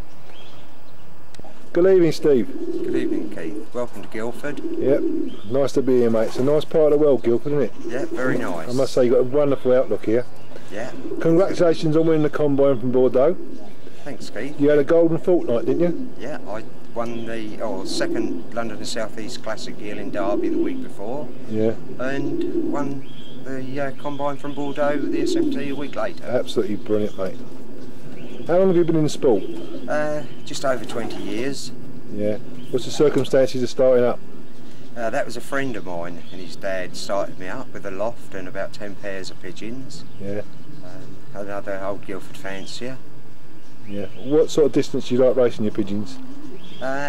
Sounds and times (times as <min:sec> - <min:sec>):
Chirp, tweet: 0:00.0 - 0:01.6, 0:05.2 - 0:11.0, 0:15.8 - 0:21.5, 0:22.8 - 0:33.6, 0:34.4 - 0:43.0, 0:43.6 - 0:47.0
Coo: 0:02.4 - 0:05.5, 0:07.7 - 0:08.8, 0:10.7 - 0:11.6, 0:15.2 - 0:16.2, 0:17.6 - 0:18.6, 0:19.8 - 0:23.0, 0:24.6 - 0:25.9, 0:29.3 - 0:31.5, 0:45.8 - 0:47.0.